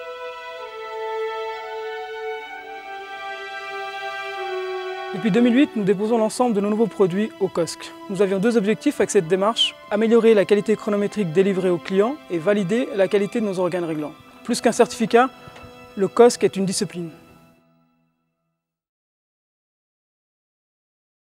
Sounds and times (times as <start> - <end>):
Music: 0.0 - 18.9
Speech: 5.2 - 15.3, 16.0 - 17.2.